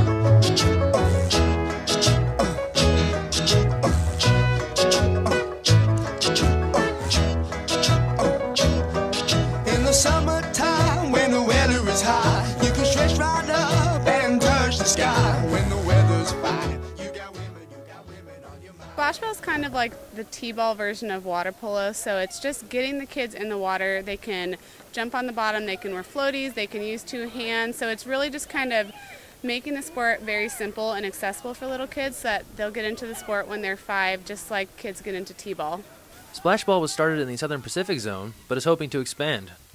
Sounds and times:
Music: 0:00.0 - 0:20.5.

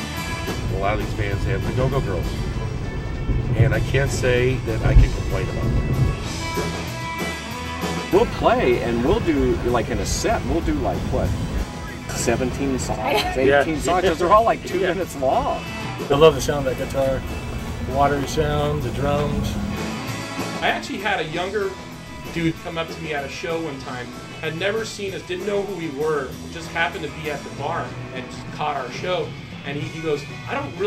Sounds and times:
Soundtrack music: 0:00.0 - 0:24.6
Speech: 0:00.7 - 0:02.4, 0:03.5 - 0:05.7, 0:08.1 - 0:17.2, 0:17.8 - 0:19.6, 0:20.6 - 0:30.8.

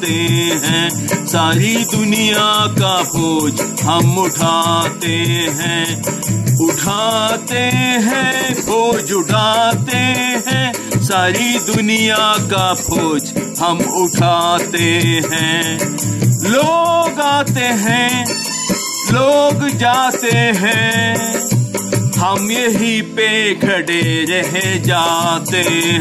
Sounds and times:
Folk music: 0:00.0 - 0:26.0.

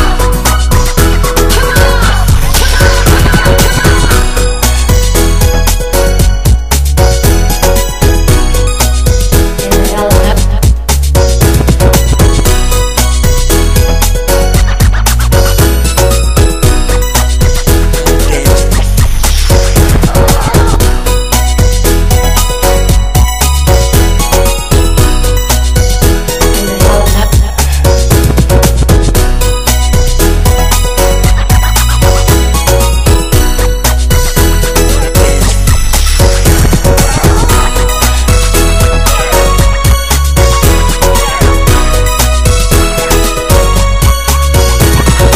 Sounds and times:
Music: 0:00.0 - 0:45.3.

